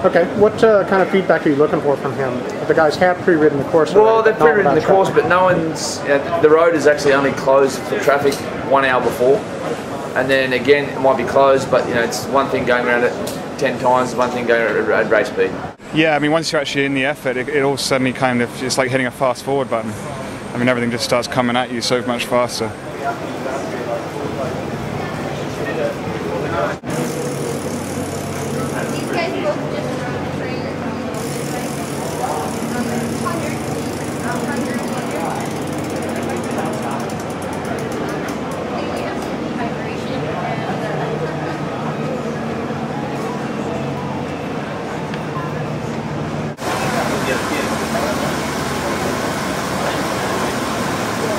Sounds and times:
Speech: 10.2 - 26.8, 46.6 - 50.6.

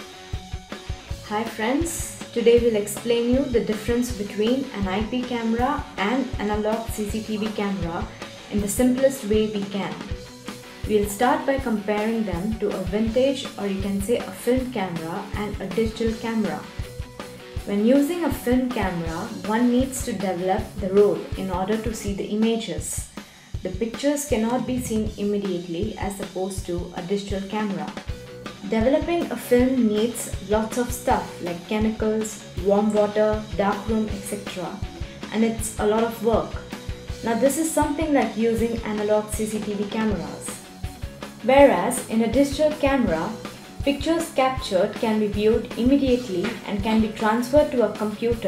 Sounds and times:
Music: 0.0 - 48.4
Speech: 1.3 - 10.1, 10.9 - 16.7, 17.7 - 28.0, 28.6 - 36.6, 37.2 - 40.6, 41.4 - 48.4.

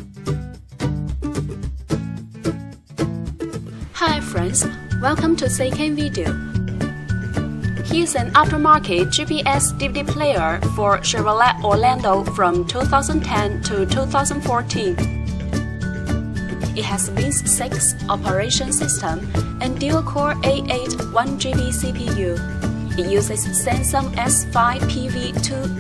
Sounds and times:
Background music: 0.0 - 25.8
Speech: 4.0 - 6.4, 7.9 - 15.0, 16.8 - 22.4, 23.0 - 25.8.

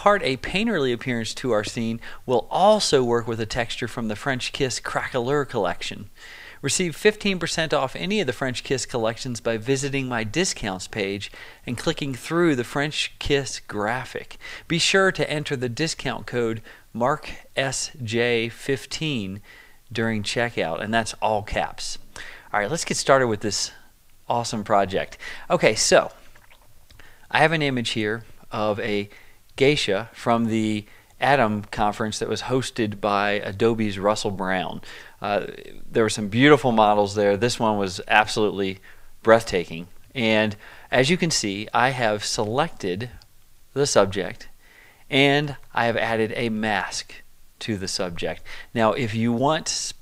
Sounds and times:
Speech: 0.0 - 26.2, 27.3 - 44.5, 45.1 - 50.0.

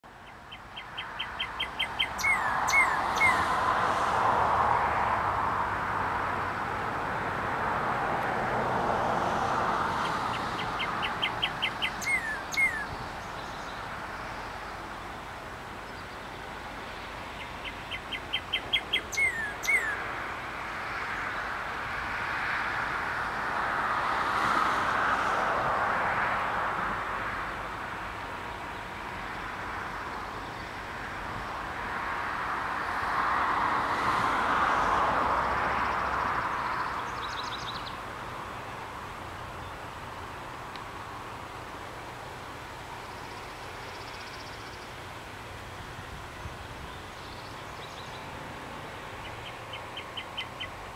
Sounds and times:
Chirp, tweet: 0.2 - 3.4, 10.3 - 14.7, 17.4 - 20.0, 36.7 - 38.0, 46.4 - 48.3, 49.2 - 50.8.

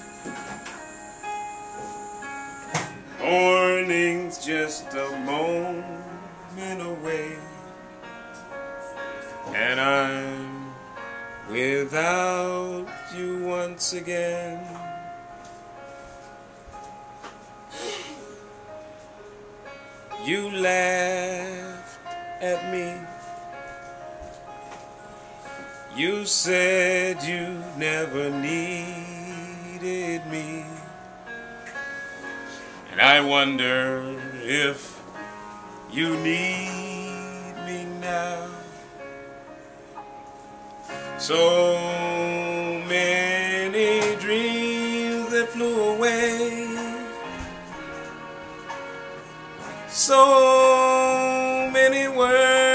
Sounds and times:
Inside, small room: 0.0 - 52.7
Music: 0.0 - 52.7.

